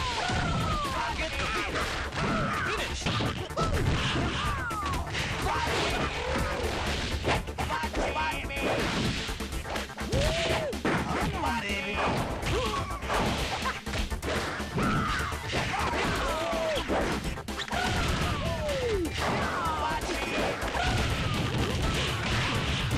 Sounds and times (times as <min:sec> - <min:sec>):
Music: 0:00.0 - 0:22.9.